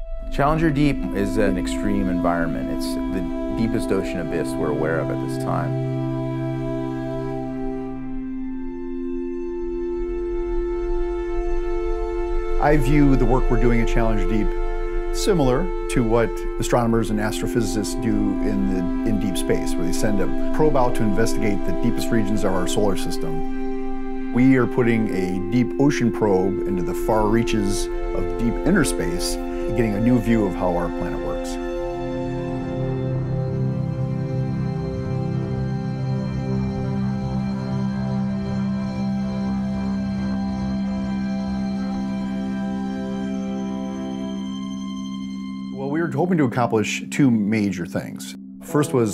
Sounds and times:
Music: 0.0 - 49.1
Speech: 0.3 - 5.8, 12.6 - 14.6, 15.2 - 23.4, 24.4 - 31.6, 45.8 - 49.1.

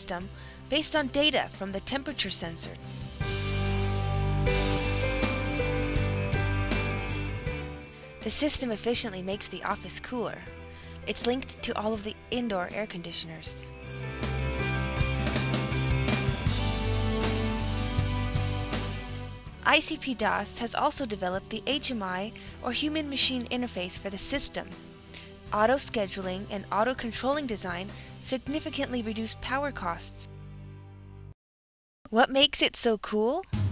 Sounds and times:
Speech: 0.0 - 2.8, 8.2 - 13.6, 19.6 - 24.7, 25.5 - 30.3, 32.1 - 33.5
Music: 0.0 - 31.4, 33.5 - 33.7.

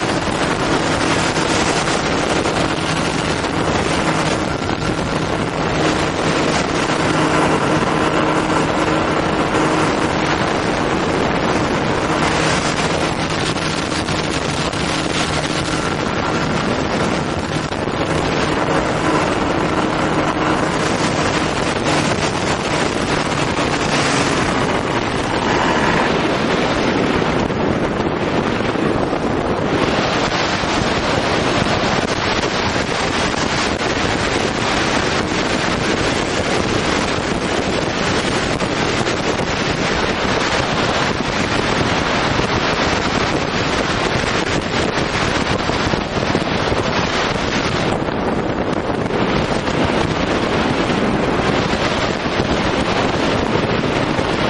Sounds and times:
Engine: 0.0 - 54.4.

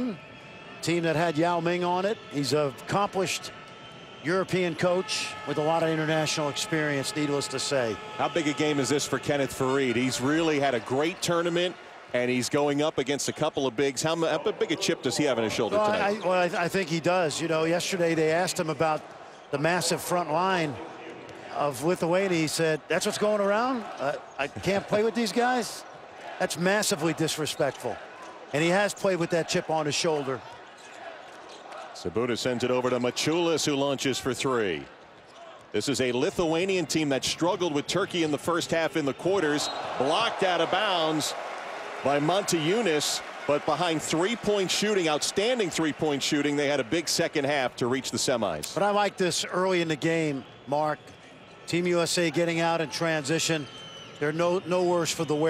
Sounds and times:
Speech: 0.8 - 3.5, 4.2 - 30.5, 32.0 - 34.9, 35.7 - 41.4, 42.0 - 51.0, 51.7 - 55.4.

